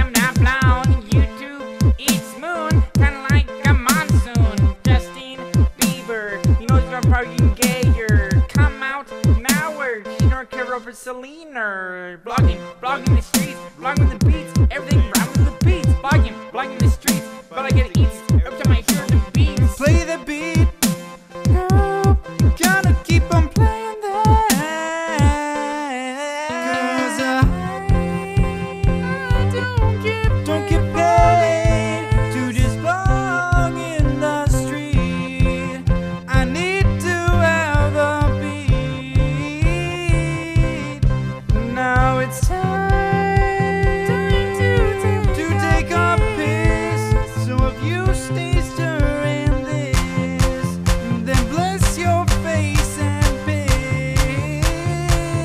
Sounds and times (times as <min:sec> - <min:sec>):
Music: 0:00.0 - 0:11.6, 0:12.2 - 0:55.4.